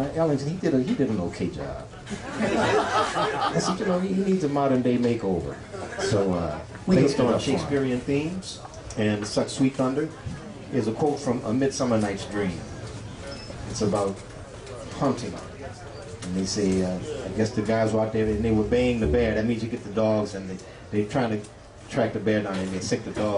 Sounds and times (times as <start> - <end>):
Speech: 0.0 - 1.9, 3.4 - 12.7, 13.7 - 23.3.